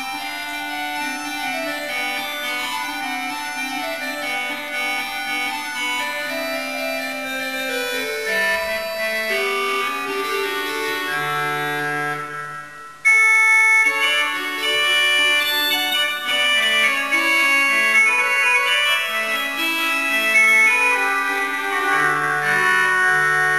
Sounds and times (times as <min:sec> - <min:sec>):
Organ: 0:00.0 - 0:23.5.